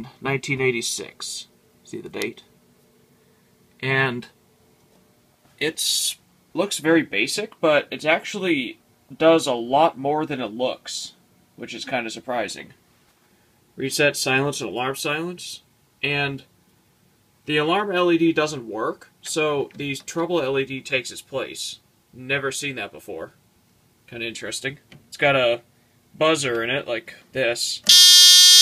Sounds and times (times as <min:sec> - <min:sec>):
Speech: 0:00.0 - 0:02.5, 0:03.8 - 0:04.4, 0:05.6 - 0:12.8, 0:13.8 - 0:16.5, 0:17.4 - 0:23.4, 0:24.1 - 0:27.9.